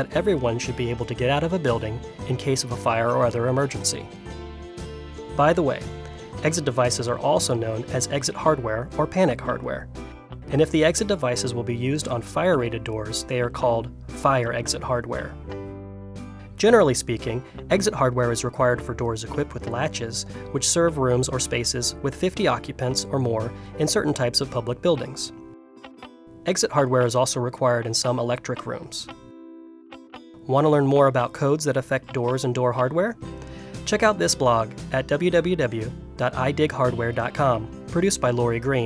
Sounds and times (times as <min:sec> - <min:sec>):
Speech: 0:00.0 - 0:04.1, 0:05.4 - 0:09.9, 0:10.5 - 0:15.4, 0:16.6 - 0:25.4, 0:26.5 - 0:29.1, 0:30.5 - 0:33.2, 0:33.9 - 0:38.8
Music: 0:00.0 - 0:38.8.